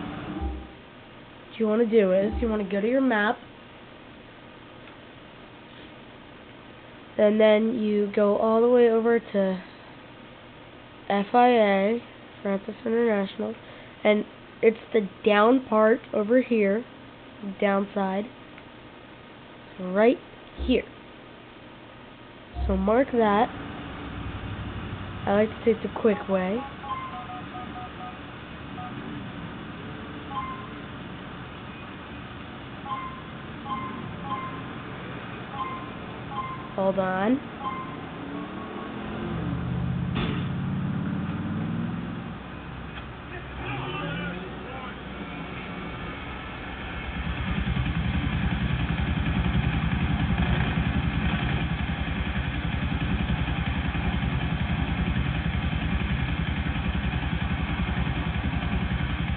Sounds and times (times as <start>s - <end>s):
Speech: 1.6s - 3.4s, 7.2s - 9.7s, 11.1s - 18.3s, 19.8s - 20.9s, 22.6s - 23.5s, 25.3s - 26.7s, 36.8s - 37.4s, 43.3s - 45.8s.